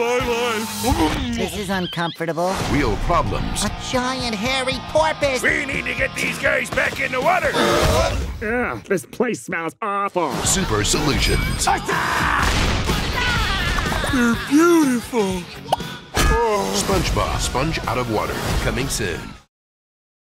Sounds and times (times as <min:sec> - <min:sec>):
Music: 0:00.0 - 0:01.8, 0:02.6 - 0:08.4, 0:10.2 - 0:19.5
Speech: 0:08.4 - 0:12.0.